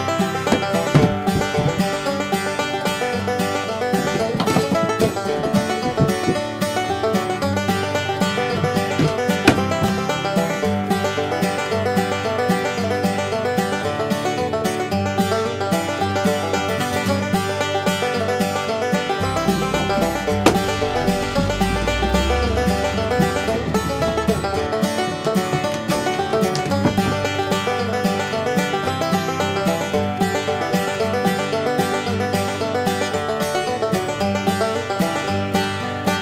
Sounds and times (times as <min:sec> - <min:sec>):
Music: 0:00.0 - 0:36.2.